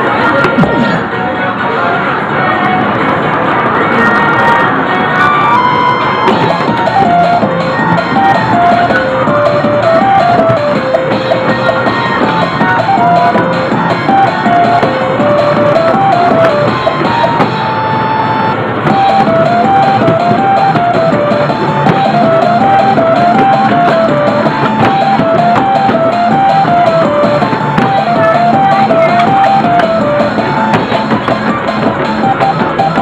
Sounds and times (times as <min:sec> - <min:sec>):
Music: 0:00.0 - 0:33.0.